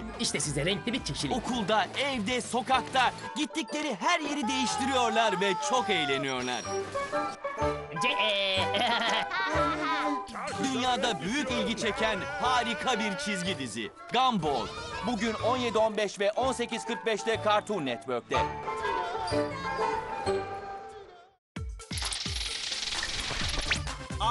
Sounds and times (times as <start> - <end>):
Music: 0.0 - 24.3
Speech: 0.2 - 6.6, 10.4 - 18.4.